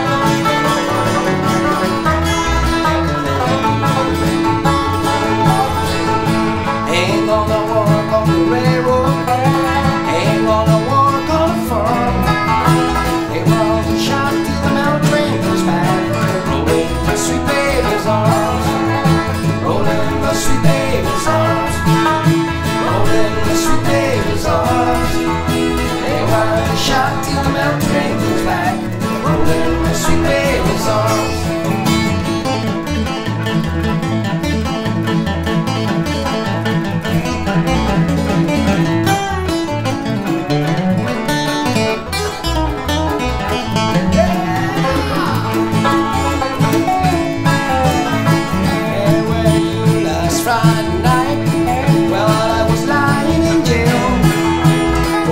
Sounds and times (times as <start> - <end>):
Banjo: 0.0 - 55.3
Steel guitar, slide guitar: 0.0 - 55.3.